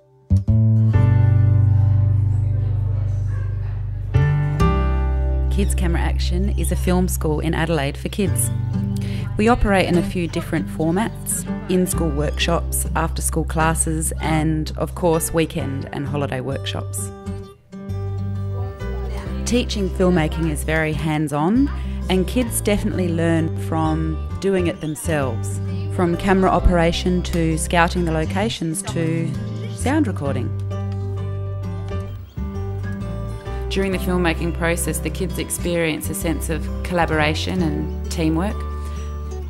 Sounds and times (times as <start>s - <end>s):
Music: 0.0s - 39.4s
Speech: 5.5s - 8.6s, 9.3s - 17.2s, 18.7s - 30.5s, 33.7s - 38.6s.